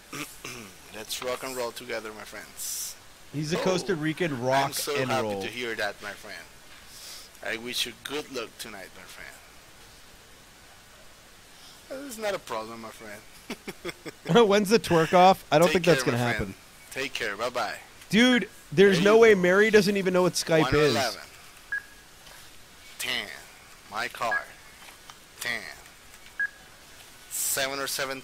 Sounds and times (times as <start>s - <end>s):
Speech: 0.9s - 6.5s, 7.4s - 9.4s, 11.9s - 13.2s, 14.2s - 21.3s, 23.0s - 24.5s, 25.4s - 25.8s, 27.4s - 28.2s.